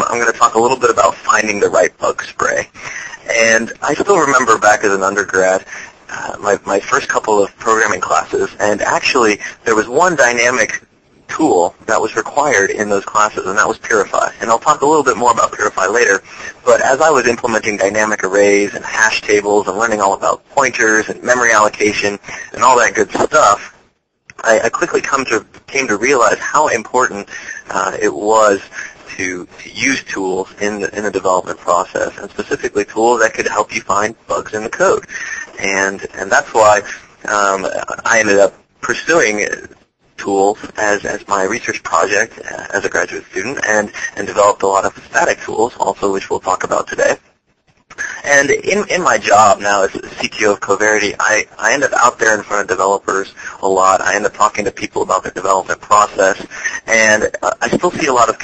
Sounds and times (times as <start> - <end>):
Speech: 0.0 - 47.2, 48.0 - 58.4.